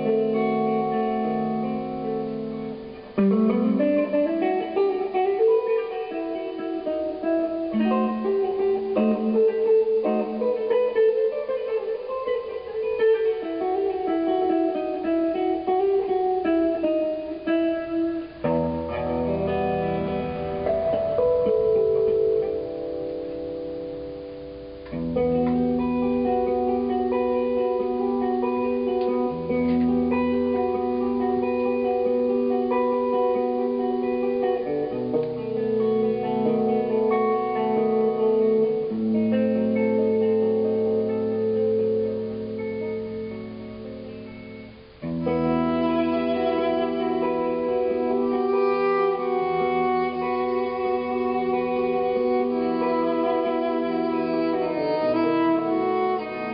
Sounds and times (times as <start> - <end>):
Strum: 0.0 - 56.5.